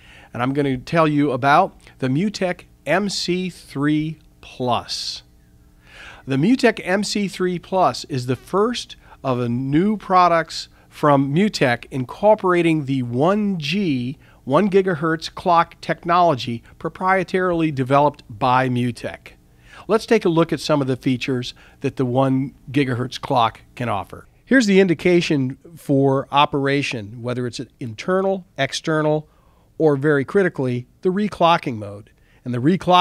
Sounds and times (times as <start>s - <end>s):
Speech: 0.3s - 5.3s, 6.3s - 33.0s.